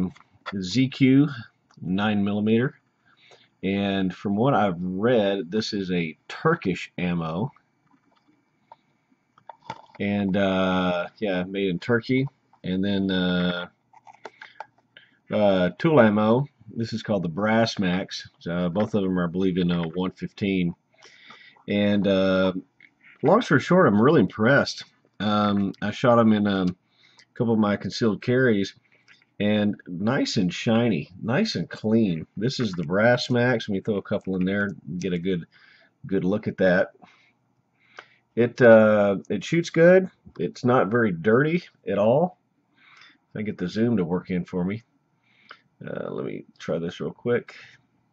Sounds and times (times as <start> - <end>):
Speech: 0.0 - 2.8, 3.6 - 7.5, 9.7 - 13.7, 15.3 - 22.6, 23.2 - 26.8, 27.4 - 28.8, 29.4 - 35.5, 36.1 - 37.0, 38.4 - 42.4, 43.4 - 44.8, 45.8 - 47.8.